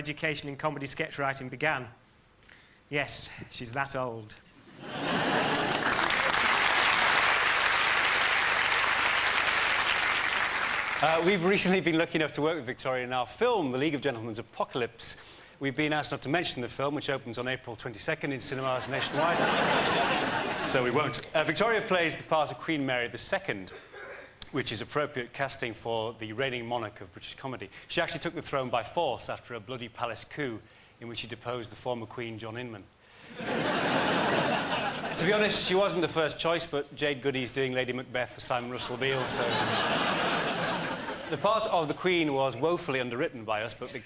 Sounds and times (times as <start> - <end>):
Speech: 0.0 - 2.0, 2.9 - 4.4, 11.0 - 19.4, 20.6 - 23.8, 24.4 - 32.9, 35.2 - 39.7, 41.3 - 44.0.